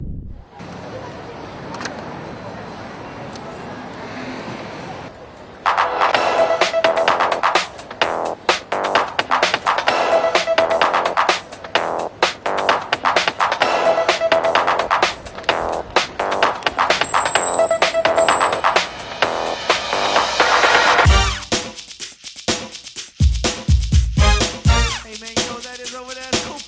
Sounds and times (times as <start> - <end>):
Music: 5.6 - 26.6.